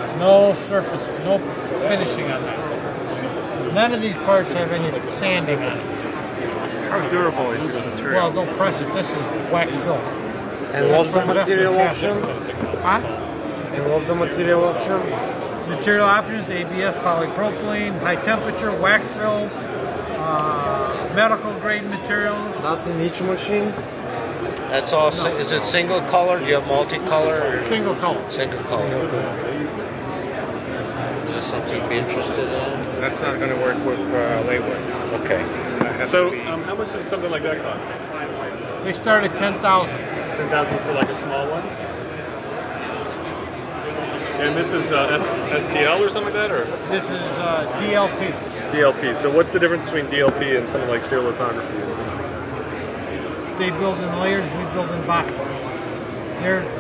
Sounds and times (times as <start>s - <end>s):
Speech: 0.0s - 23.8s, 24.5s - 29.8s, 31.2s - 41.7s, 44.1s - 52.2s, 53.4s - 55.8s.